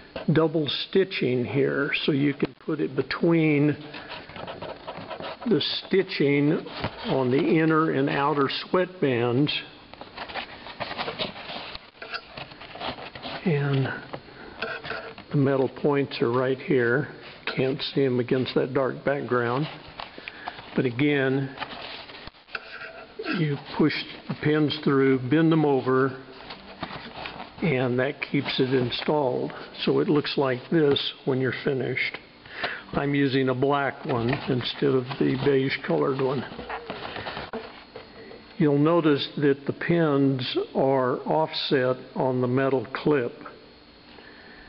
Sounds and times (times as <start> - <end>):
Speech: 0.2 - 3.9, 5.4 - 9.8, 13.4 - 14.1, 15.3 - 19.8, 20.8 - 21.6, 23.2 - 26.3, 27.6 - 32.2, 32.9 - 36.6, 38.6 - 43.6.